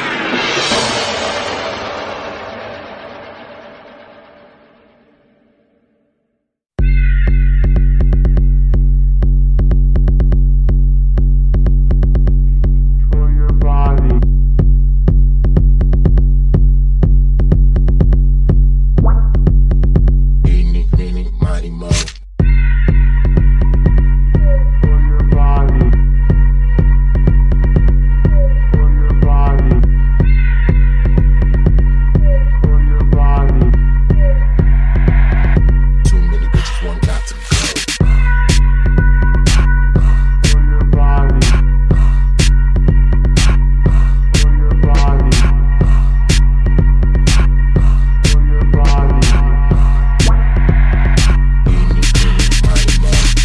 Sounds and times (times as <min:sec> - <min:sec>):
Drum machine: 0:13.4 - 0:53.4.